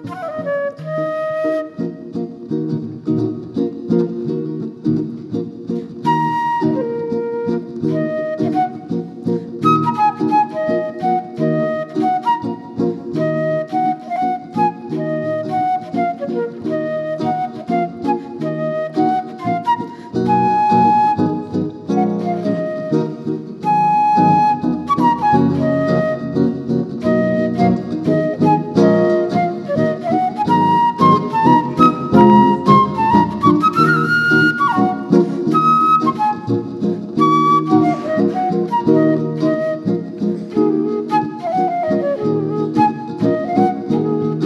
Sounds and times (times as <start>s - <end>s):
Flute: 0.0s - 2.4s, 6.0s - 44.4s.